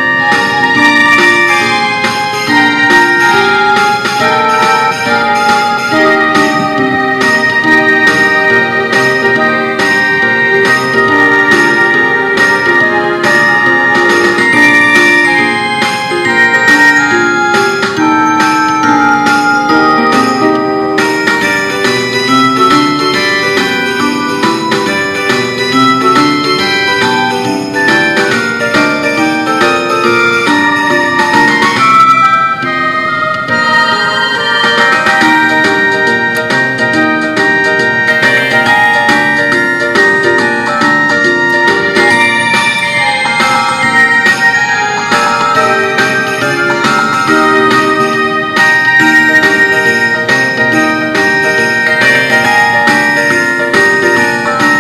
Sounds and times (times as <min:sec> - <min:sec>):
Music: 0:00.0 - 0:54.8.